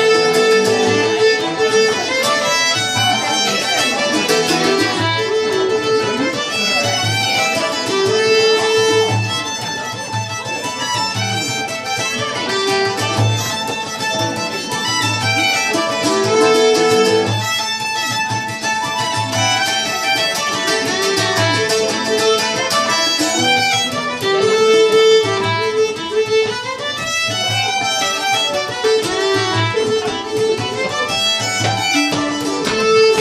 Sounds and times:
Pizzicato: 0.0s - 33.2s
Speech: 0.0s - 33.2s.

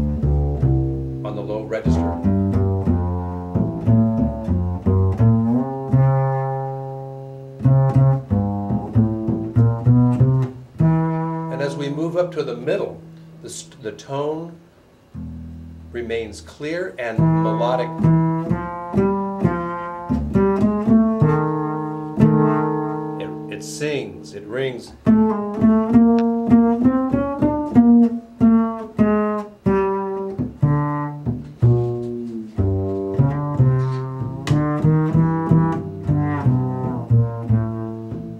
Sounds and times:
Cello: 0.0s - 13.6s, 14.4s - 38.3s
Double bass: 0.0s - 38.3s
Speech: 1.2s - 2.2s, 11.5s - 14.6s, 15.9s - 18.0s, 23.2s - 25.0s.

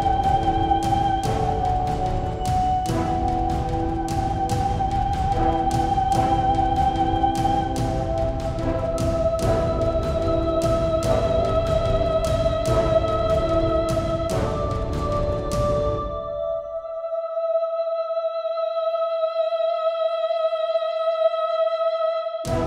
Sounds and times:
Music: 0.0s - 22.6s.

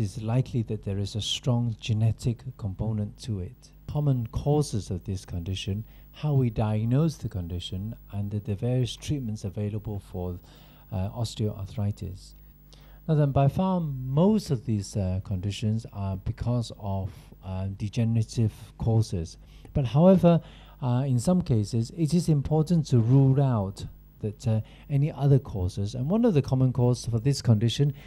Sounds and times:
Speech: 0.0s - 12.4s, 13.1s - 28.0s.

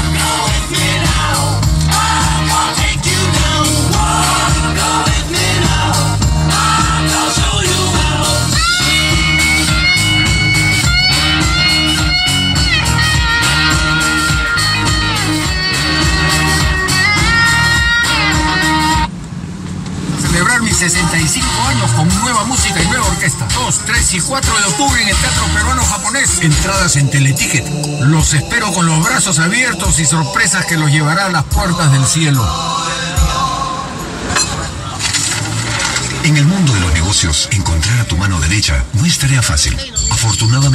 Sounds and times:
Music: 0.0s - 19.1s, 20.3s - 34.5s
Speech: 20.2s - 32.6s, 36.2s - 40.7s.

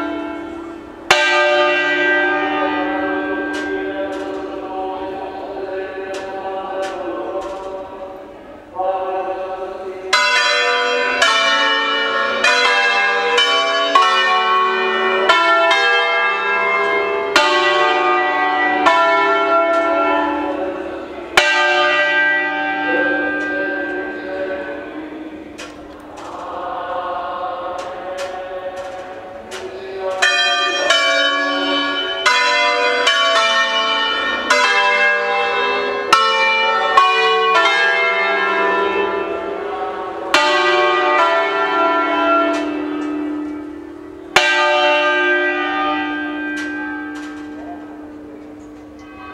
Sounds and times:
Bell: 0.0s - 8.0s, 10.1s - 49.3s.

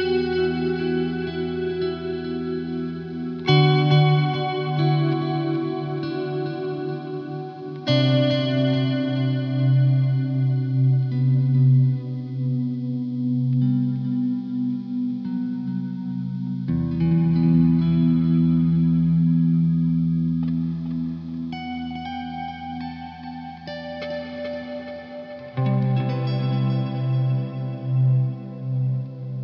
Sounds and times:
Distortion: 0.0s - 29.4s.

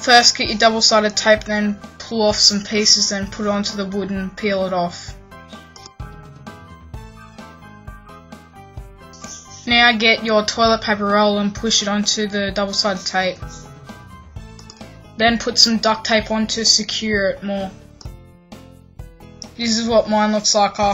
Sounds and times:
Speech: 0.0s - 5.1s, 9.5s - 13.6s, 15.2s - 17.8s, 19.6s - 20.9s
Music: 0.0s - 20.9s.

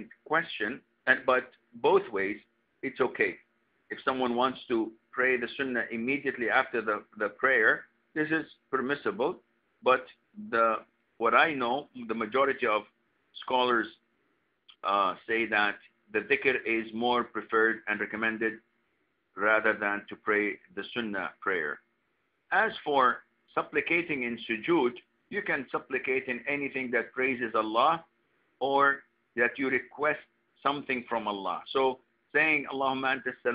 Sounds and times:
Speech: 0.0s - 14.0s, 14.7s - 18.7s, 19.4s - 21.9s, 22.5s - 33.5s.

